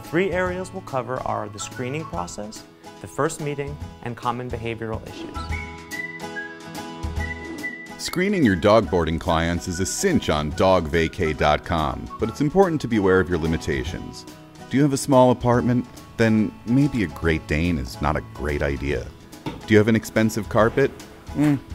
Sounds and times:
Music: 0:00.0 - 0:21.7
Speech: 0:00.1 - 0:05.4, 0:08.0 - 0:21.6.

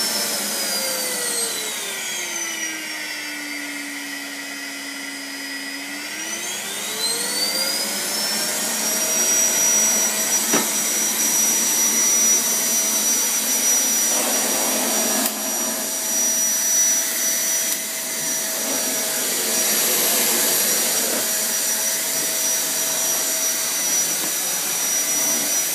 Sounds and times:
Vacuum cleaner: 0:00.0 - 0:25.7.

